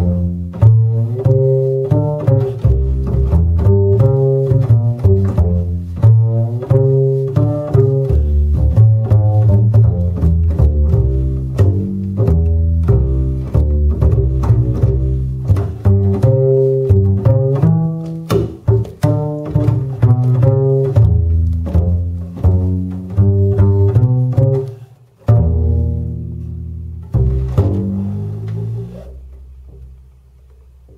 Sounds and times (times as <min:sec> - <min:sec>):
Cello: 0:00.0 - 0:30.9
Pizzicato: 0:00.0 - 0:30.9.